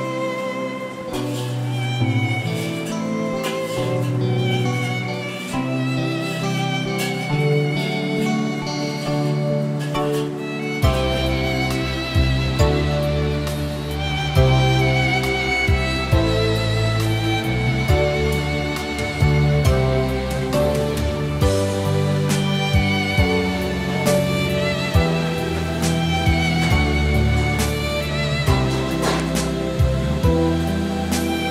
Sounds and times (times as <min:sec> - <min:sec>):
Music: 0:00.0 - 0:31.5.